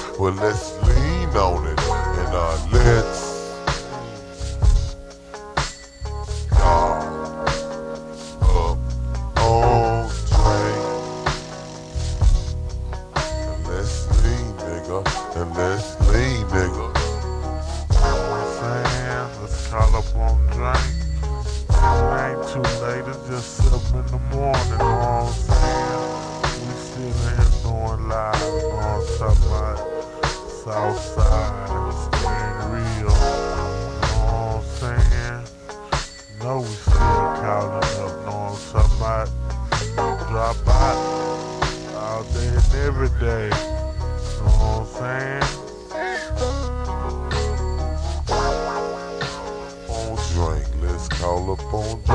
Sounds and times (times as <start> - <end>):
Music: 0.0 - 52.1.